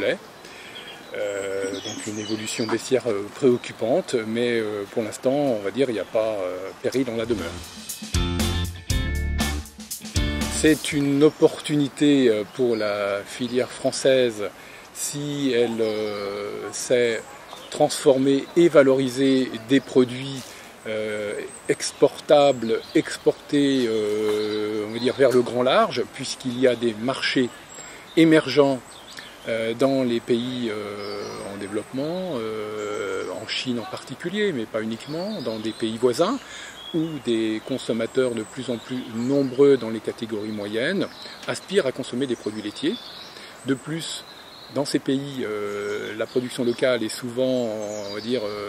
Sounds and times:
Speech: 0:00.0 - 0:00.2, 0:01.1 - 0:07.7, 0:10.5 - 0:27.6, 0:28.2 - 0:28.8, 0:29.5 - 0:43.0, 0:43.6 - 0:48.6.

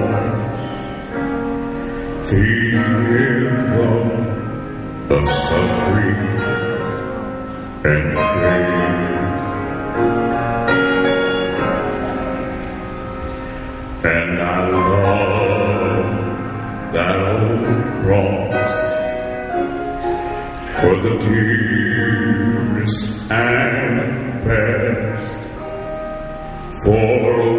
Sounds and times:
Music: 0:00.0 - 0:27.5.

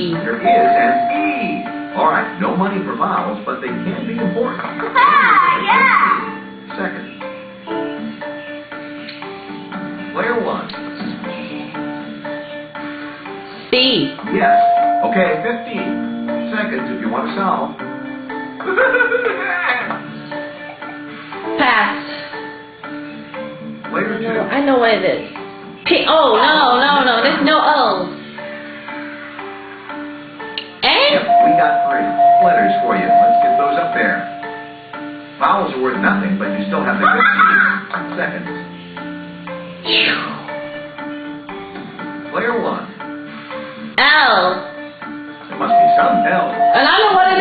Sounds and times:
Music: 0:00.0 - 0:47.4.

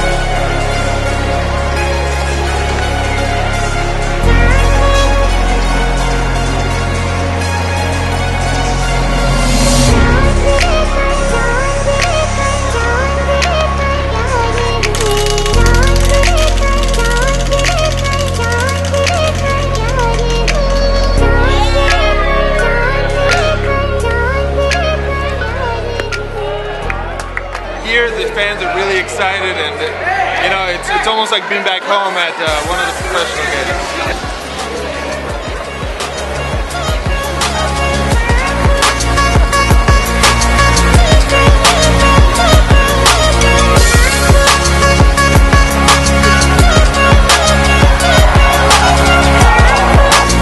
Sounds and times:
Music: 0:00.0 - 0:50.4.

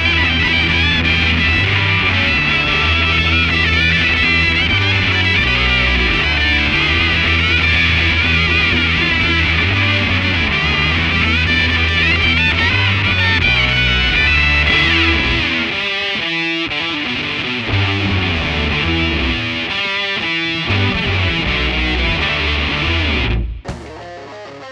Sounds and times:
Music: 0:00.0 - 0:24.7.

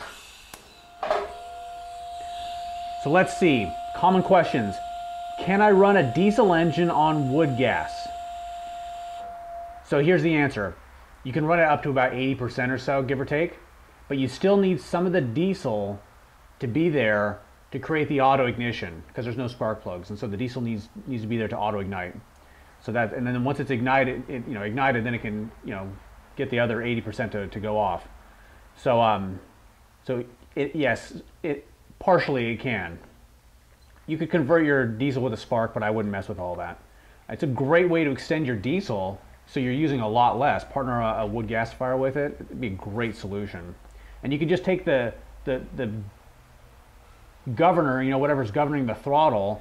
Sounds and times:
Speech: 0:03.0 - 0:04.8, 0:05.4 - 0:08.1, 0:09.9 - 0:16.0, 0:16.6 - 0:22.2, 0:22.8 - 0:28.1, 0:28.8 - 0:33.1, 0:34.1 - 0:46.2, 0:47.4 - 0:49.6.

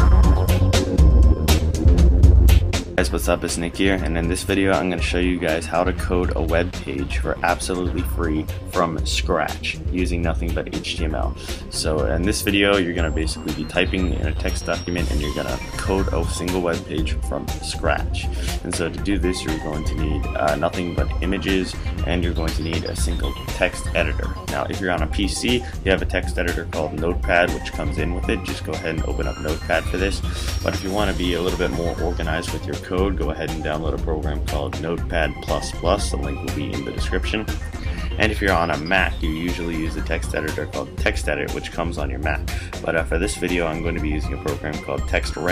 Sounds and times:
Music: 0:00.0 - 0:45.5
Speech: 0:03.0 - 0:45.5.

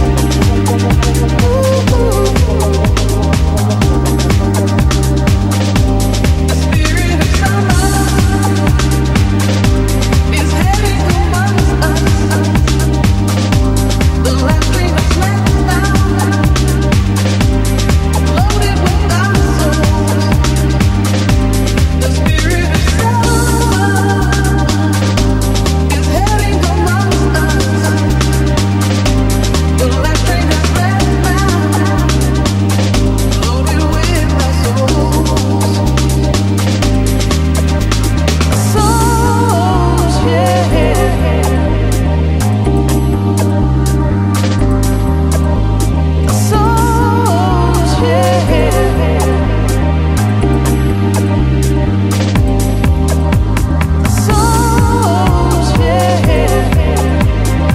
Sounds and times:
Music: 0:00.0 - 0:57.7.

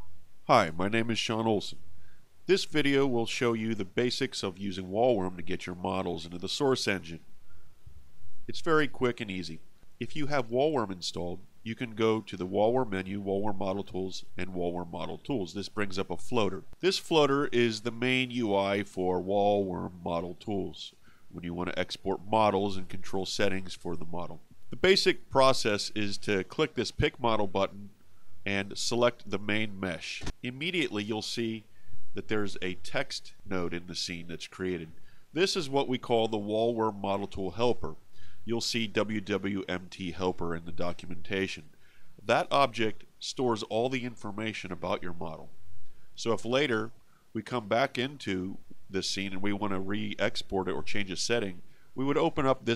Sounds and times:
Speech: 0:00.0 - 0:01.8, 0:02.5 - 0:07.2, 0:08.5 - 0:45.5, 0:46.2 - 0:52.7.

